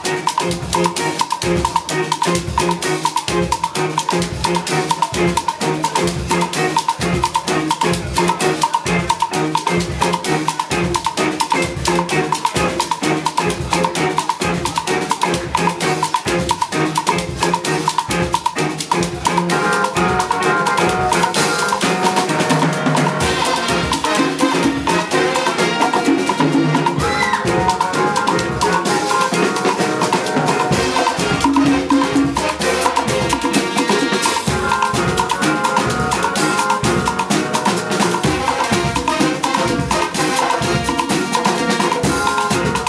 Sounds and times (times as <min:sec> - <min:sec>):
Salsa music: 0:00.0 - 0:42.8.